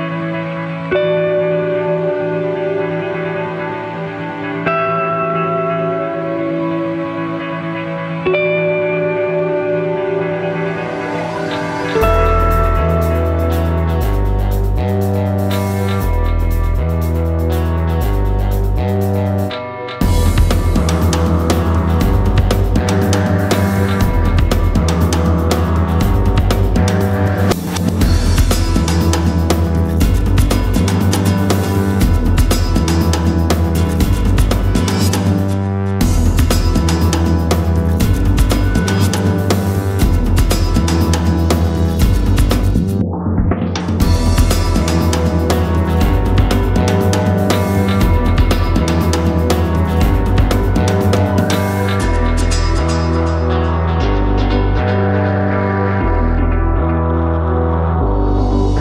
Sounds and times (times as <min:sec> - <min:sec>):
Music: 0:00.0 - 0:58.8.